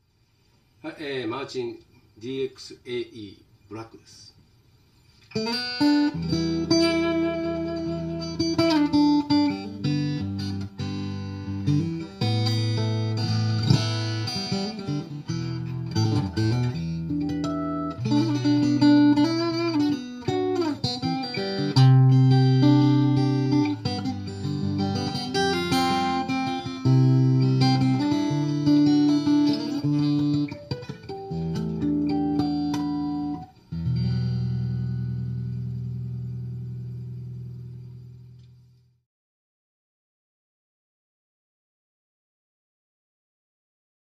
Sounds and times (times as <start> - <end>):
Electric guitar: 5.1 - 38.8.